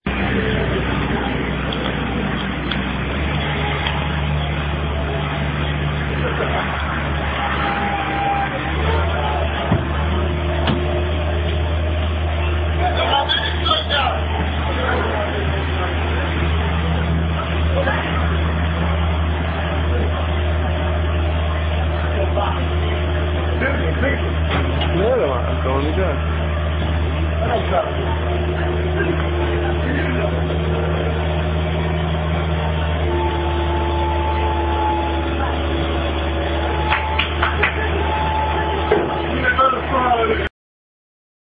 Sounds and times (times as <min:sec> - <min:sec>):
Vehicle: 0:00.0 - 0:40.5
Speech: 0:12.7 - 0:18.5, 0:21.8 - 0:26.3, 0:27.4 - 0:31.2, 0:38.7 - 0:40.5.